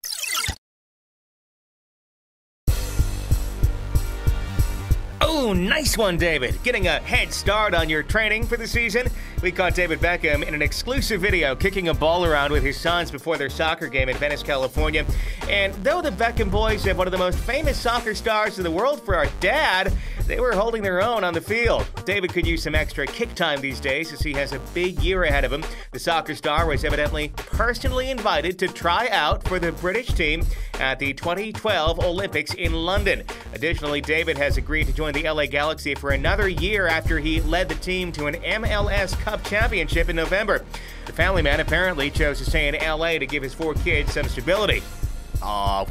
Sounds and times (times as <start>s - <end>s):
Music: 2.7s - 45.9s
Speech: 5.2s - 45.9s.